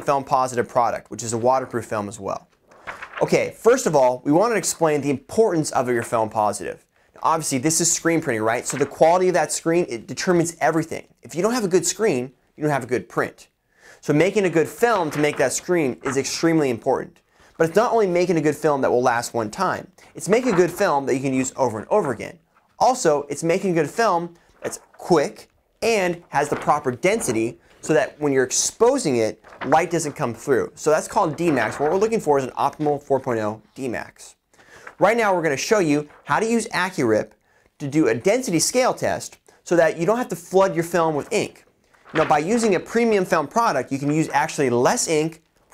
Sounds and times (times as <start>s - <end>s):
Speech: 0.0s - 2.5s, 3.2s - 34.4s, 35.0s - 45.4s.